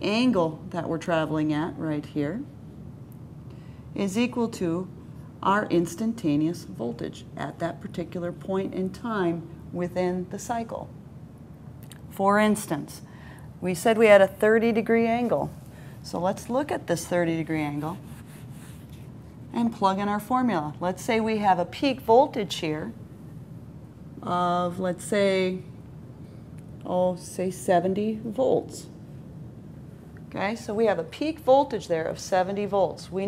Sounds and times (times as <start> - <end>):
Speech: 0.0 - 2.5, 4.0 - 10.9, 12.1 - 18.1, 19.5 - 23.0, 24.2 - 25.7, 26.8 - 29.0, 30.3 - 33.2.